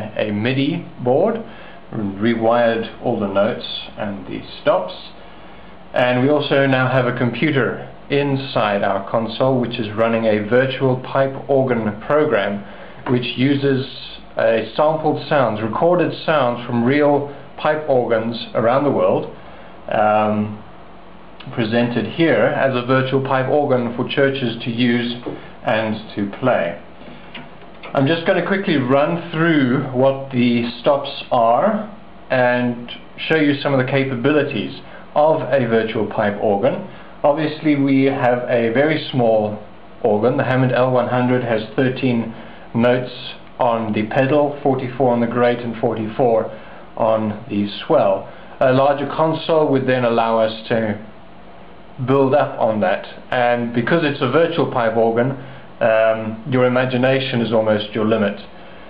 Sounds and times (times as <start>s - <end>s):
Speech: 0.0s - 5.2s, 5.9s - 20.7s, 21.4s - 26.9s, 27.9s - 51.2s, 52.0s - 58.6s.